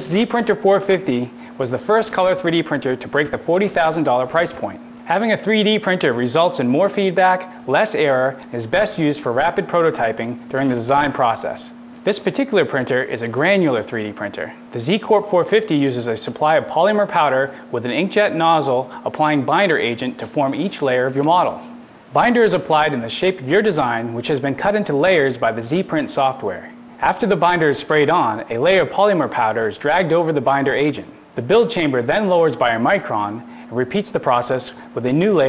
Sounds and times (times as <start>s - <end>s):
Speech: 0.0s - 35.4s.